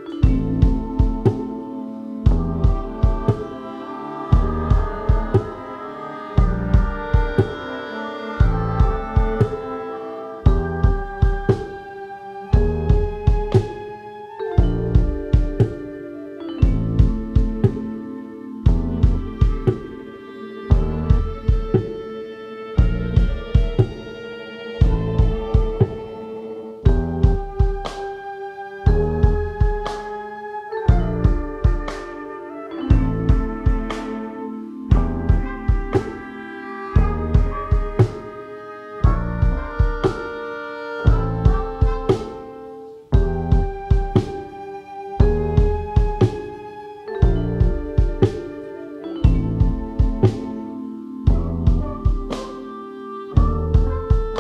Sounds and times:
Music: 0.0 - 54.4.

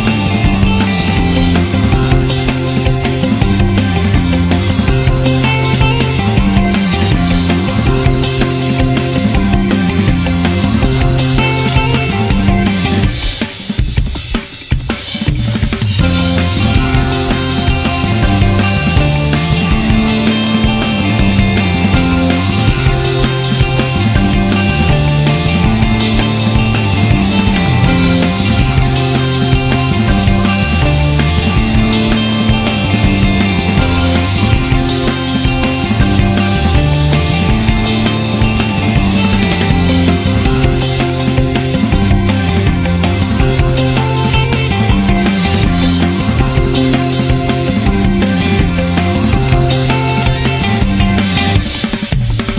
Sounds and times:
Music: 0.0 - 52.5.

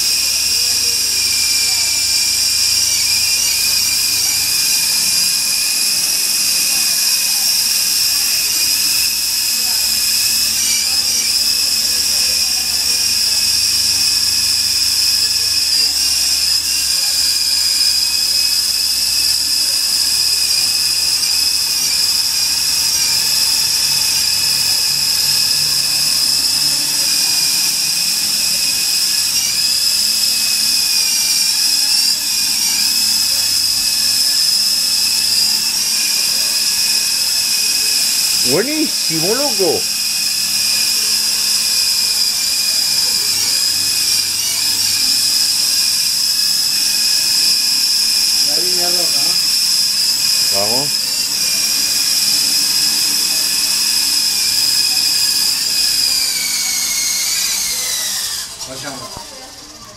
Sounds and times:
Speech: 38.4 - 39.8, 48.4 - 49.4, 50.5 - 50.9, 58.6 - 59.9.

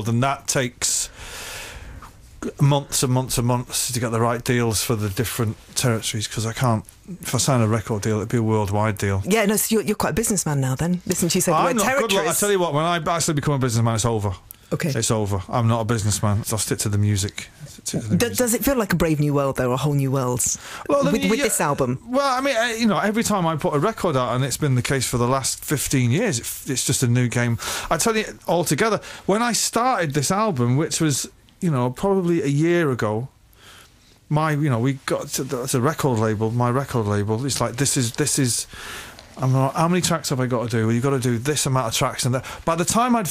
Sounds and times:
Speech: 2.4 - 33.3, 34.3 - 38.7, 39.4 - 43.3.

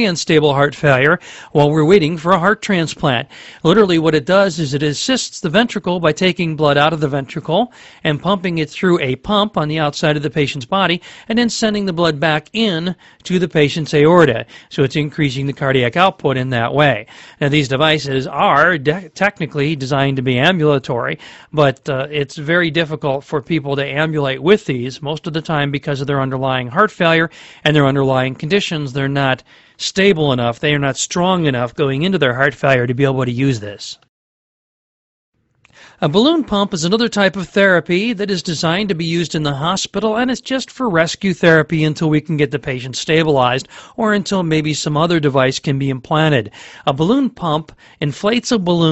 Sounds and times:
Speech: 0.0 - 34.1, 36.0 - 48.9.

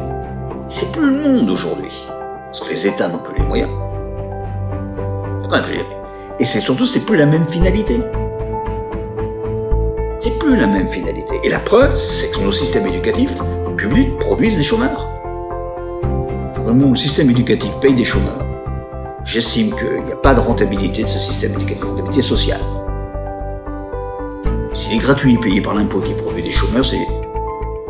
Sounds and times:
Music: 0.0 - 27.8
Speech: 0.7 - 3.8, 5.4 - 8.1, 10.2 - 15.1, 16.6 - 18.5, 19.3 - 22.8, 24.8 - 27.2.

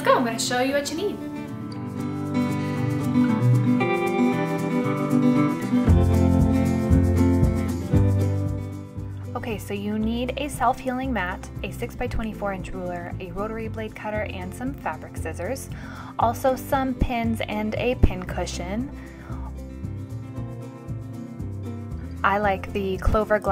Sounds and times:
Speech: 0.0 - 1.2, 9.4 - 18.9, 22.2 - 23.5
Music: 0.0 - 23.5.

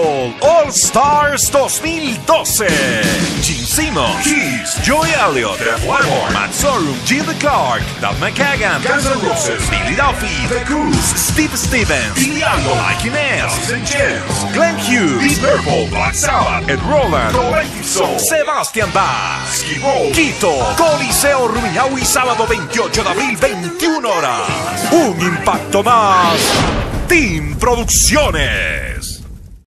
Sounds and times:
Speech: 0.0 - 29.2
Music: 0.0 - 29.5.

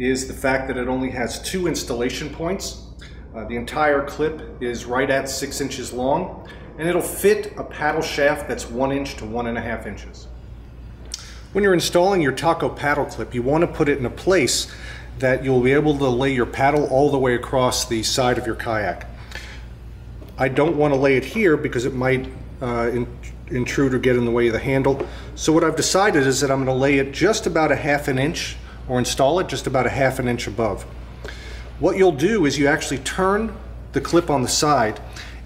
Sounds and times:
Speech: 0.0 - 10.3, 11.5 - 19.2, 20.4 - 30.9, 31.8 - 35.1.

